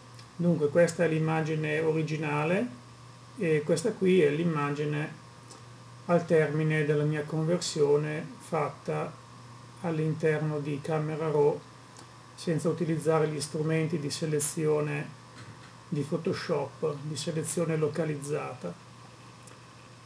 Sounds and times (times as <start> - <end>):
Speech: 0.4 - 2.8, 3.4 - 5.2, 6.1 - 9.2, 9.8 - 11.7, 12.4 - 15.2, 15.9 - 18.8.